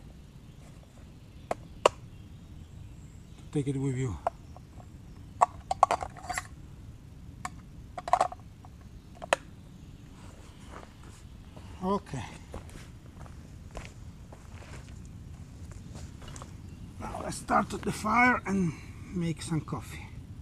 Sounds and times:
Speech: 0:03.5 - 0:04.3, 0:11.8 - 0:12.5, 0:17.0 - 0:20.2.

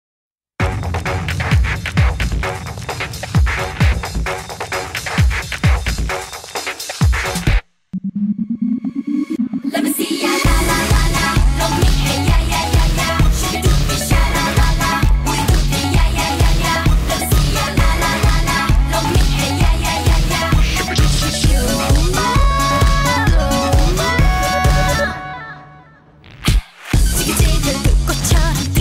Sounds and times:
Music: 0:00.6 - 0:07.7, 0:08.6 - 0:28.8
Singing: 0:09.7 - 0:26.0, 0:27.0 - 0:28.8.

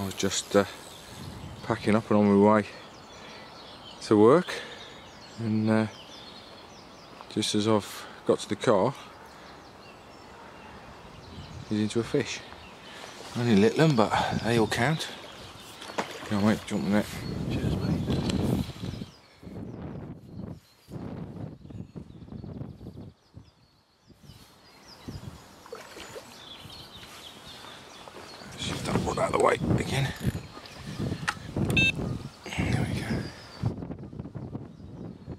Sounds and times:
Speech: 0:00.0 - 0:00.8, 0:01.6 - 0:02.8, 0:04.0 - 0:04.7, 0:05.4 - 0:06.0, 0:07.3 - 0:09.1, 0:11.7 - 0:12.5, 0:13.4 - 0:15.2, 0:16.3 - 0:18.1, 0:28.5 - 0:30.3, 0:32.5 - 0:33.4.

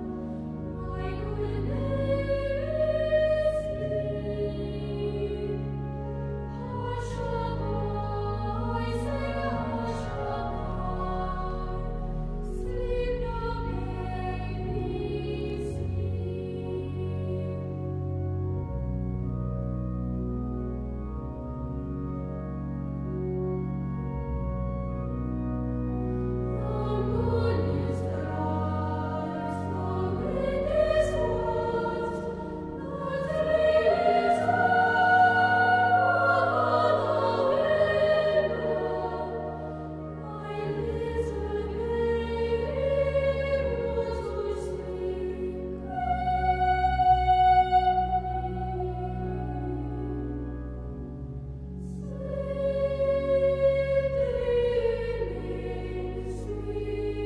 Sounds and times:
Lullaby: 0:00.0 - 0:19.0, 0:26.6 - 0:57.2.

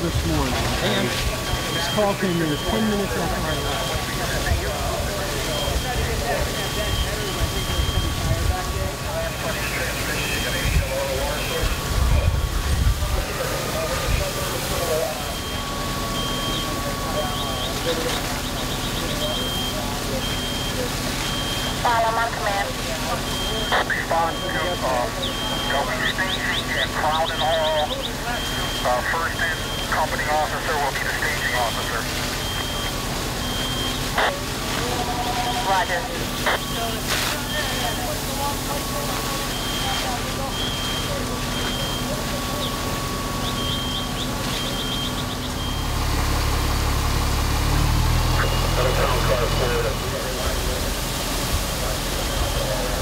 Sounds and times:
Speech: 0:00.0 - 0:32.5, 0:34.1 - 0:43.4, 0:48.3 - 0:53.0.

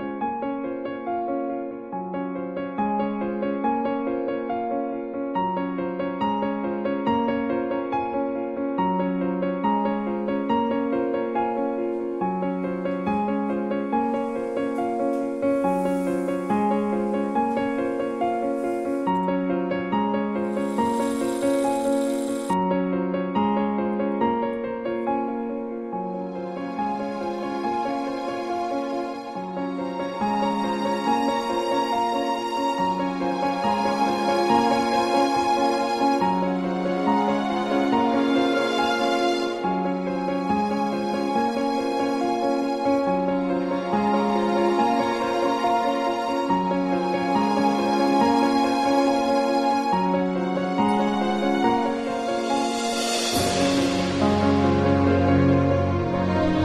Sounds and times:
Music: 0:00.0 - 0:56.6.

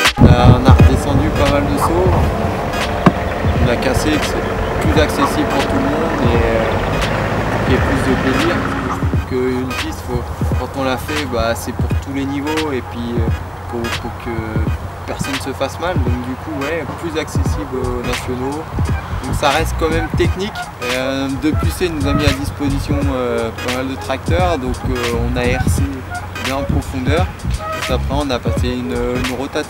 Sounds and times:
Music: 0:00.0 - 0:29.6
Speech: 0:00.0 - 0:29.6.

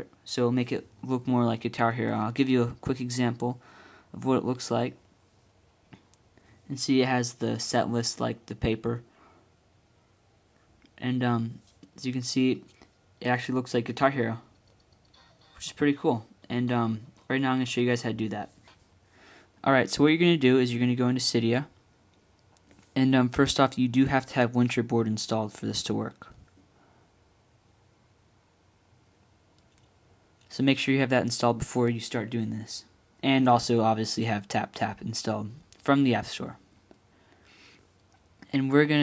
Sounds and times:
Speech: 0:00.0 - 0:05.0, 0:06.7 - 0:09.1, 0:11.0 - 0:14.5, 0:15.2 - 0:18.6, 0:19.6 - 0:21.8, 0:22.9 - 0:26.4, 0:30.5 - 0:36.6, 0:38.4 - 0:39.0.

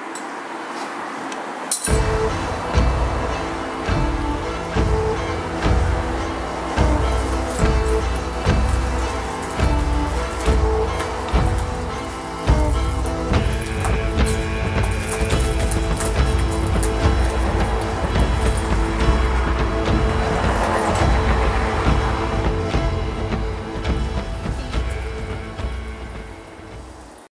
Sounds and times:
Music: 0:01.8 - 0:27.3.

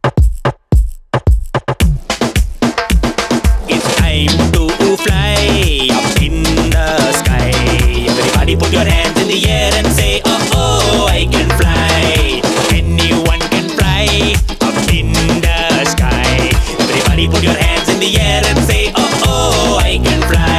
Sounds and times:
Funny music: 0:00.0 - 0:20.5.

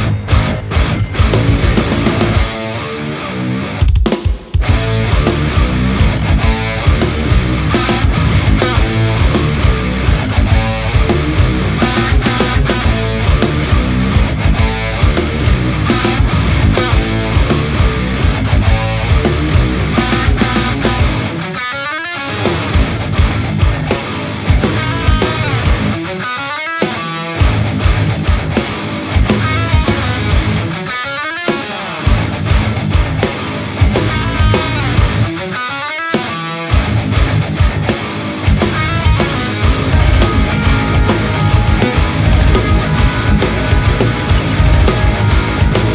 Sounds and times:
Electric guitar: 0:00.0 - 0:45.9.

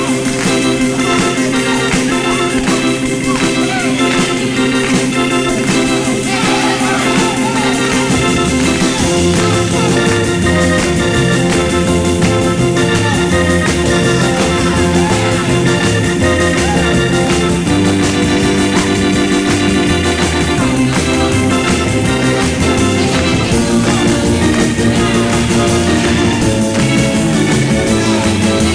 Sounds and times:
Music: 0:00.0 - 0:28.7
Speech: 0:06.3 - 0:08.1.

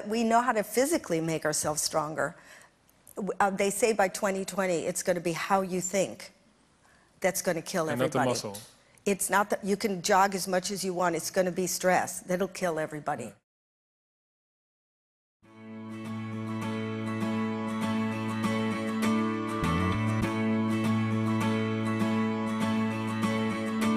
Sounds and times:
Speech: 0:07.3 - 0:13.4
Music: 0:15.4 - 0:23.9.

